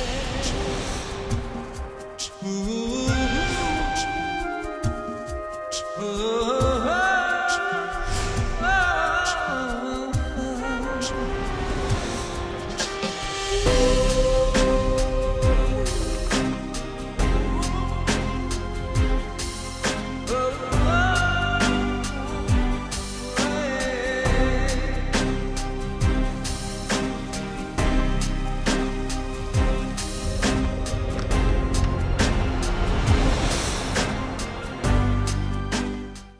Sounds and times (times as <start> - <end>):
Music: 0.0 - 36.4.